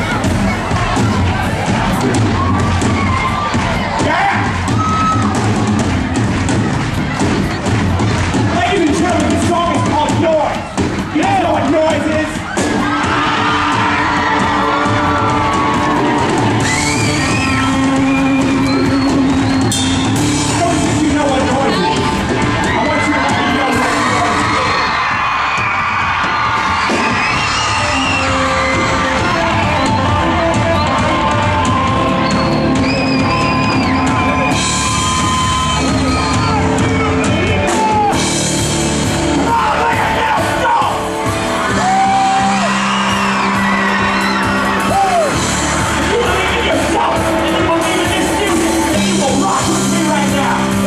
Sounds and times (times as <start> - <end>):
Music: 0.0 - 50.8.